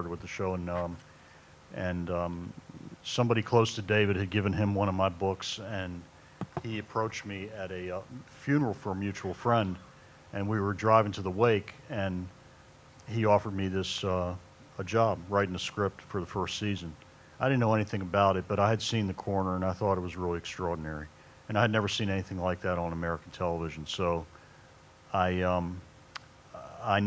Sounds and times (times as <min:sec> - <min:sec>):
Speech: 0:00.0 - 0:01.0, 0:01.7 - 0:12.4, 0:13.1 - 0:24.3, 0:25.1 - 0:25.9, 0:26.6 - 0:27.0.